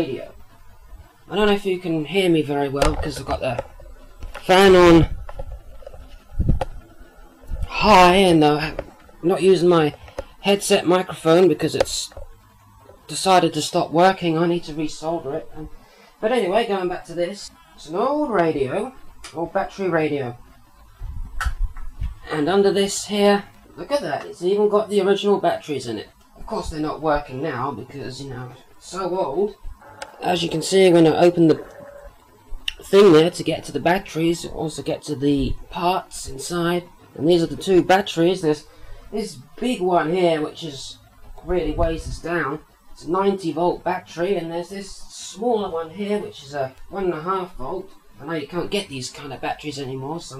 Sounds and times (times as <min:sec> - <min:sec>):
Speech: 0:00.0 - 0:00.4, 0:01.3 - 0:03.7, 0:04.4 - 0:05.1, 0:07.7 - 0:12.2, 0:13.1 - 0:20.4, 0:22.2 - 0:29.6, 0:30.2 - 0:31.7, 0:32.7 - 0:50.3.